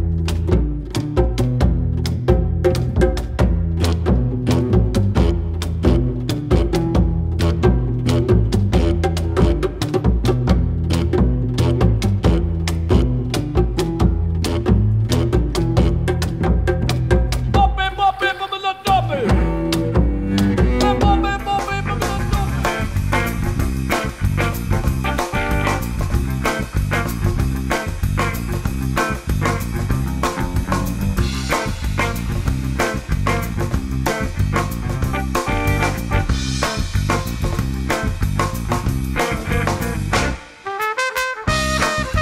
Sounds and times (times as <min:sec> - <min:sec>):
Music: 0:00.0 - 0:42.2.